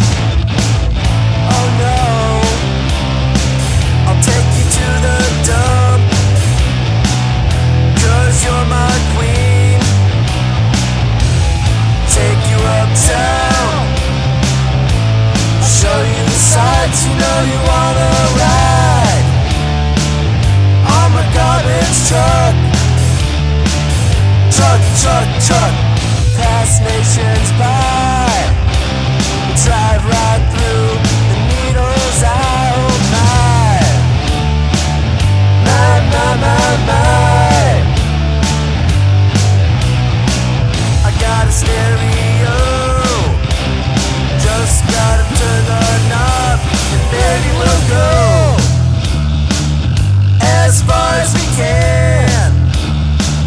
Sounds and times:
Music: 0.0 - 53.4.

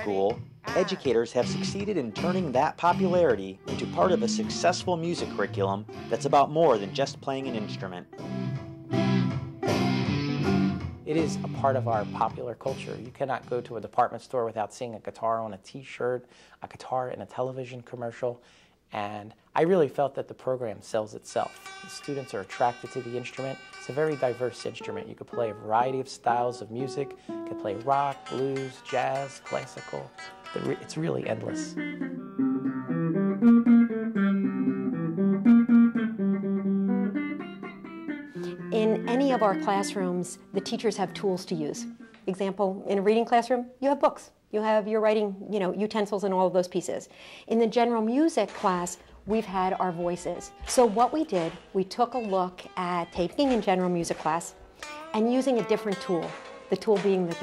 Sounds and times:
Speech: 0.0 - 8.1, 11.1 - 31.8, 38.7 - 54.6, 55.2 - 57.4
Bass guitar: 0.0 - 13.8, 30.0 - 42.3.

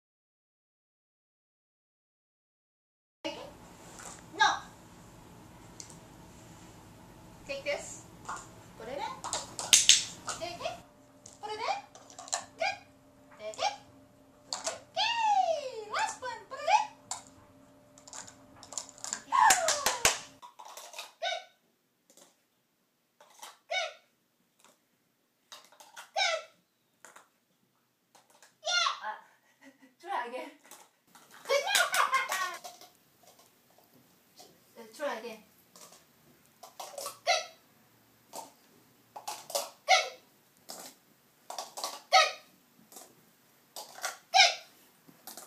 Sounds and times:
Speech: 3.3 - 3.6, 4.3 - 4.7, 7.5 - 8.0, 8.8 - 9.3, 10.3 - 10.8, 11.4 - 11.9, 13.4 - 13.8, 14.9 - 17.0, 30.0 - 30.6, 31.5 - 32.6, 34.8 - 35.5.

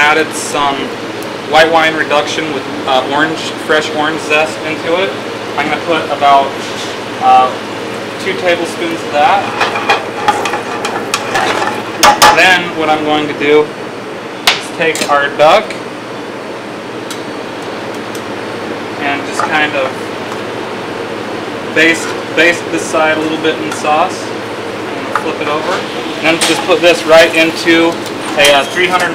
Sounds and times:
Speech: 0.0 - 0.9, 1.5 - 6.6, 7.2 - 7.6, 8.2 - 9.5, 12.3 - 13.8, 14.6 - 15.8, 19.0 - 20.0, 21.8 - 24.4, 25.2 - 29.1.

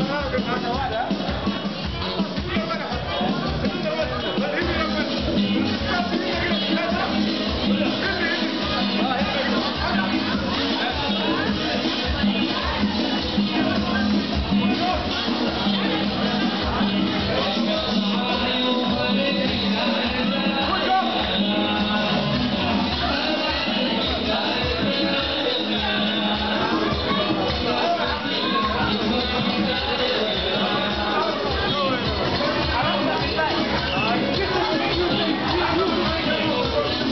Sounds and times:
Music: 0.0 - 37.1
Speech: 0.0 - 37.1.

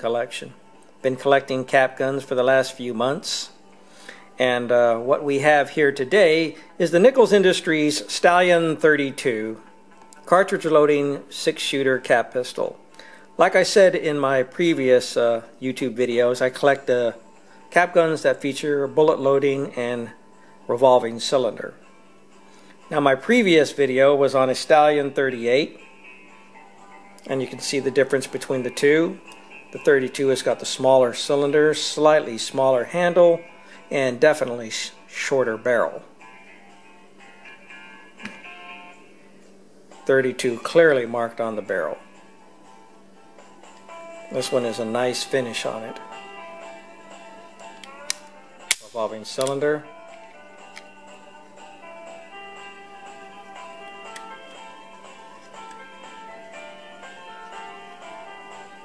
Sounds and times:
Speech: 0.0 - 3.6, 4.4 - 9.6, 10.2 - 12.8, 13.4 - 21.8, 22.9 - 25.8, 27.3 - 36.1, 40.1 - 42.0, 44.3 - 46.0, 48.8 - 49.9
Music: 0.0 - 58.8.

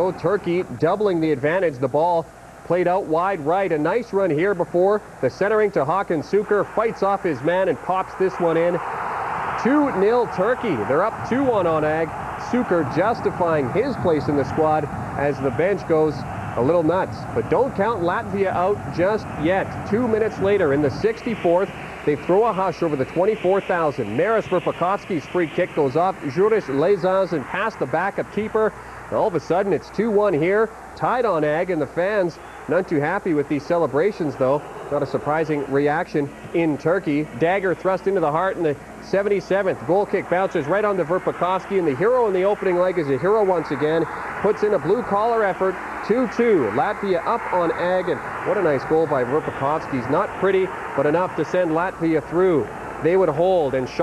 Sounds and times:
Speech: 0.0 - 8.8, 9.6 - 54.0.

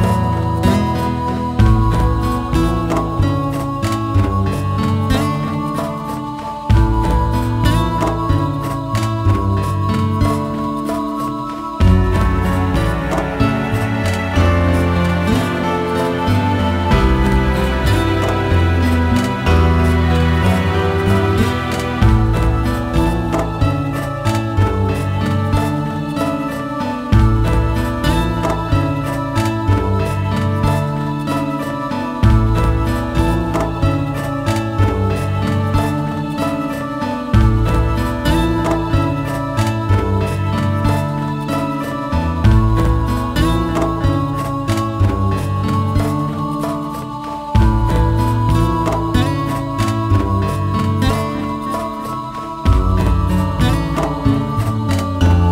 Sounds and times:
Music: 0.0 - 55.5.

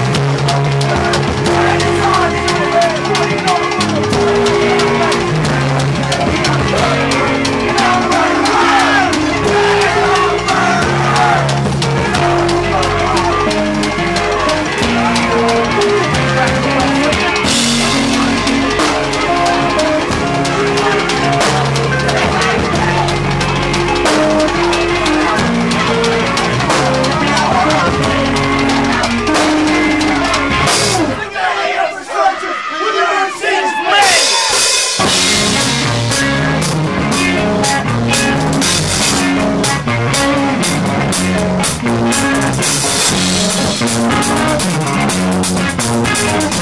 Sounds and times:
Music: 0.0 - 31.4, 34.0 - 46.6.

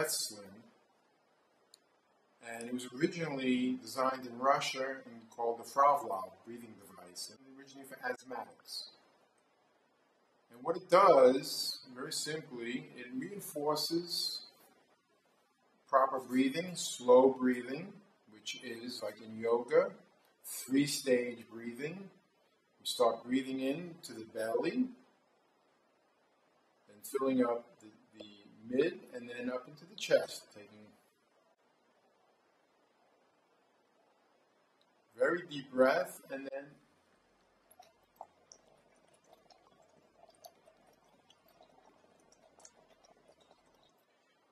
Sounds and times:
Speech: 0.0 - 0.7, 2.4 - 9.0, 10.5 - 14.6, 15.9 - 22.2, 22.8 - 25.0, 26.9 - 31.0, 35.2 - 36.8.

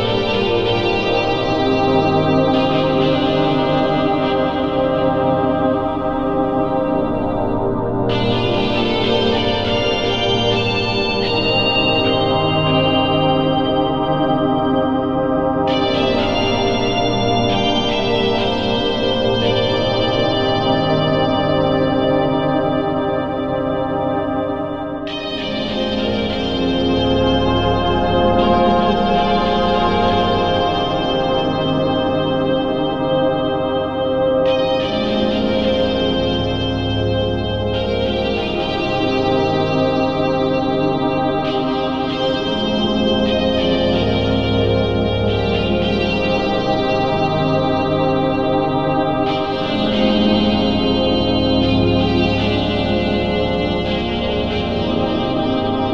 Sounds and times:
Ambient music: 0.0 - 55.9.

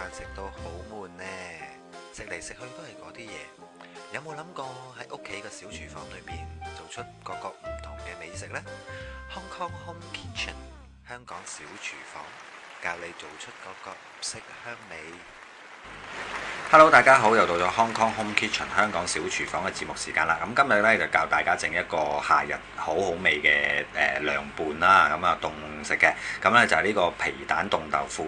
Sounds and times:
Music: 0.0 - 12.3, 16.3 - 28.2
Speech: 0.0 - 15.3, 16.7 - 28.2.

